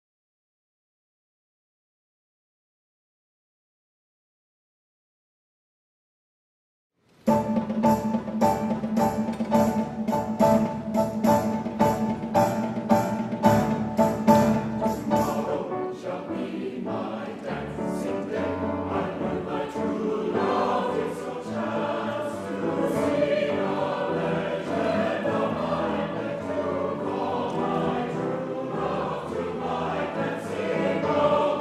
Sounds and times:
Pizzicato: 7.3 - 31.6.

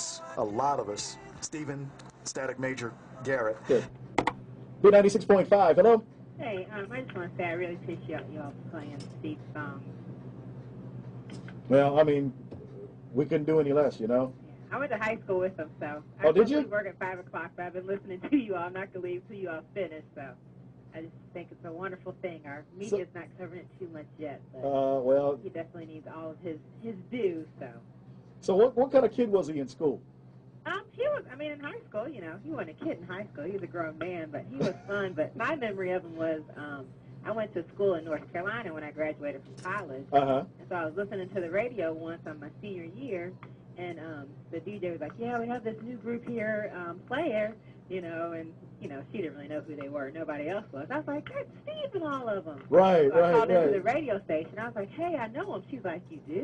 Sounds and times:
Speech: 0.0 - 3.9, 4.8 - 9.9, 11.7 - 12.4, 13.2 - 20.3, 21.0 - 27.8, 28.4 - 30.0, 30.7 - 56.4.

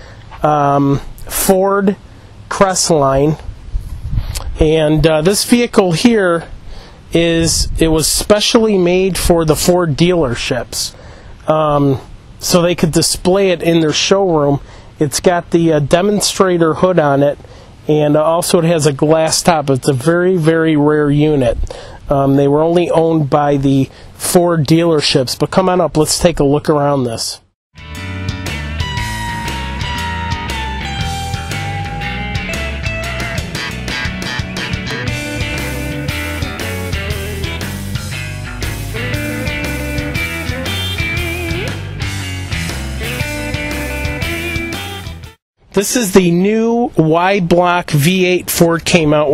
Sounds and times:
Speech: 0.4 - 3.4, 4.6 - 6.5, 7.1 - 27.5, 45.7 - 49.3.

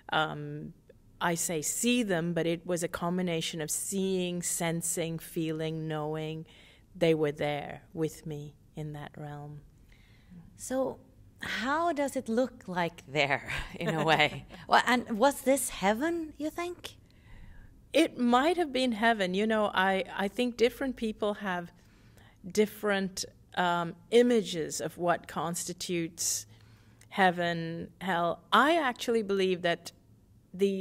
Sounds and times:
Conversation: 0.0 - 30.8.

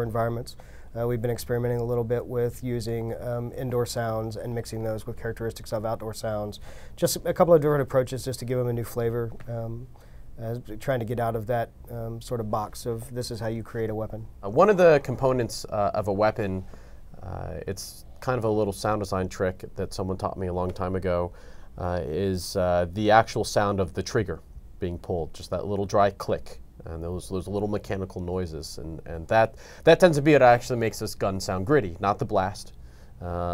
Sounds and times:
Speech: 0.0 - 33.5.

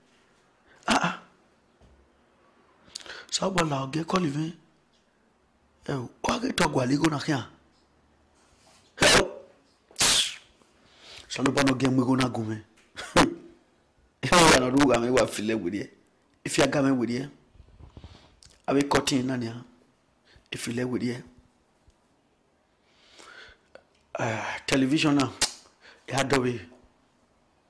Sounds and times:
Speech: 3.3 - 4.7, 5.8 - 7.6, 11.3 - 13.4, 14.2 - 17.4, 18.6 - 19.8, 20.5 - 21.4, 24.1 - 25.5, 26.1 - 26.8.

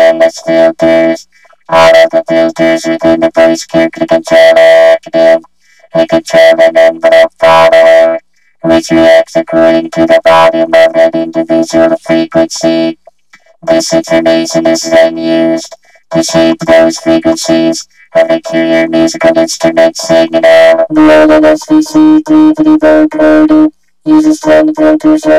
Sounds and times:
Speech: 0.0 - 13.0, 13.6 - 25.3
Synthesizer: 0.0 - 22.0.

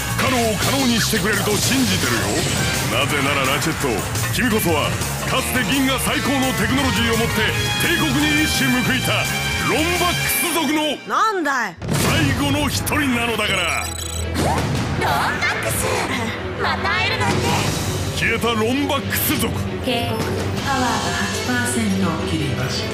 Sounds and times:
Music: 0.0 - 22.9.

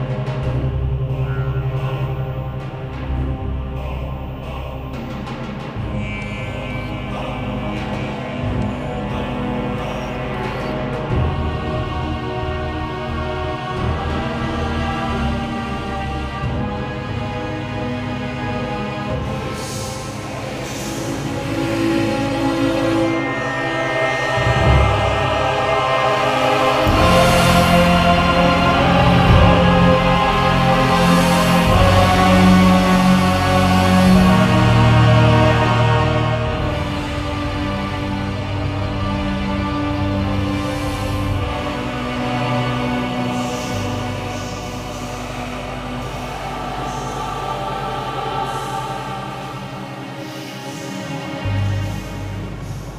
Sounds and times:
Background music: 0.0 - 52.9.

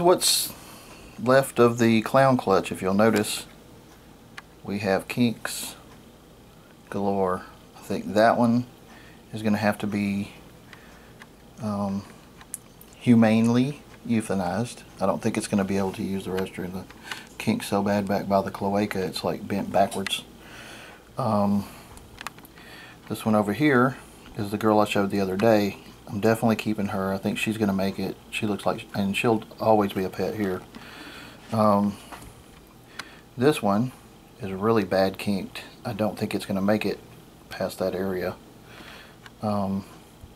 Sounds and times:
Speech: 0.0 - 0.6, 1.2 - 3.5, 4.6 - 5.9, 6.9 - 8.7, 9.3 - 10.4, 11.6 - 12.1, 13.0 - 20.3, 21.2 - 21.8, 23.1 - 30.7, 31.5 - 32.0, 33.4 - 38.4, 39.4 - 40.0
Inside, small room: 0.0 - 40.3.

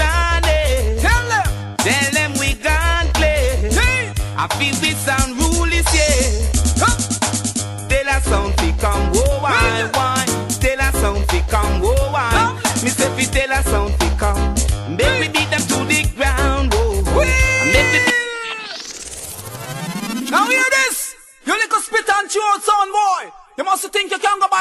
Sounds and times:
Music: 0.0 - 21.0
Speech: 20.3 - 24.6.

